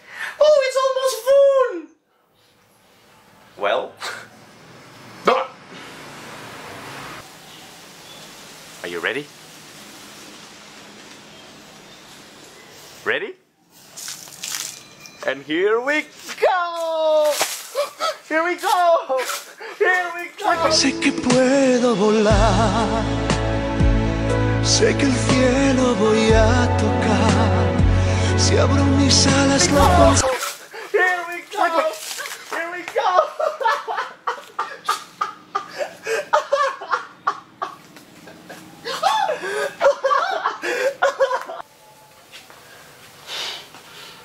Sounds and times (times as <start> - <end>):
Speech: 0.4 - 2.0, 3.6 - 4.3, 8.8 - 9.3, 13.0 - 13.4, 15.2 - 17.4, 18.3 - 20.8, 29.6 - 33.3
Music: 20.5 - 30.3.